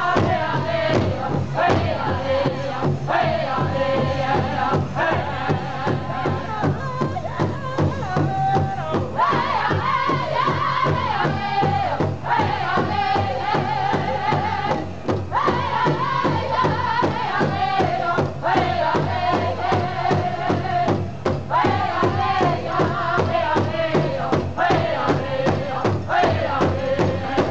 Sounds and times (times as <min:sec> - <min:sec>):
Drum: 0:00.0 - 0:27.5.